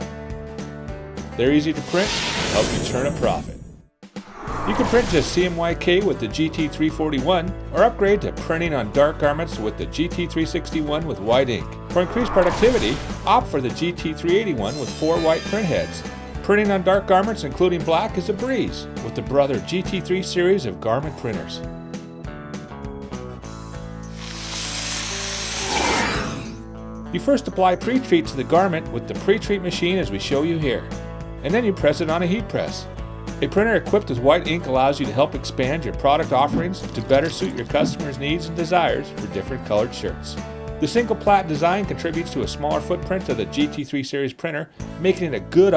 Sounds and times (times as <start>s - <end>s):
Music: 0.0s - 45.7s
Speech: 1.4s - 3.6s, 4.7s - 21.7s, 27.2s - 45.7s.